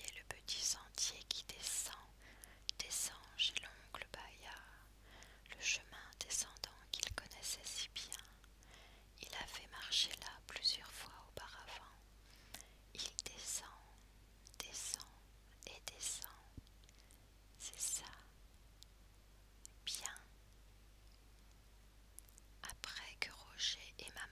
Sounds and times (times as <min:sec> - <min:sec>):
Whispering: 0:00.0 - 0:04.8, 0:05.5 - 0:08.4, 0:09.2 - 0:12.0, 0:13.0 - 0:14.0, 0:14.6 - 0:16.6, 0:17.6 - 0:18.3, 0:19.6 - 0:20.3, 0:22.6 - 0:24.3.